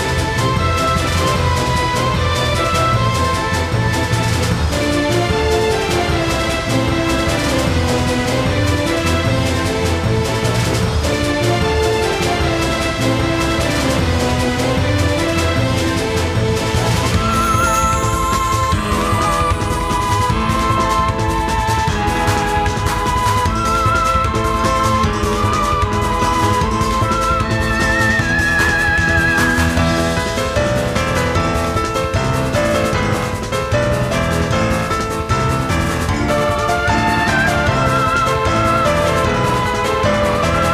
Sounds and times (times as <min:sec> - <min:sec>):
Music: 0:00.0 - 0:40.7.